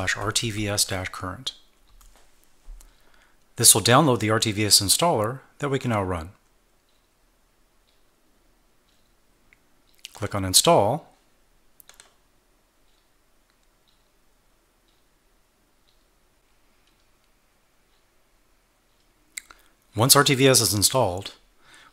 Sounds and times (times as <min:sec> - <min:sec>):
Speech: 0:00.0 - 0:01.6, 0:03.6 - 0:06.4, 0:10.1 - 0:11.2, 0:19.9 - 0:21.4.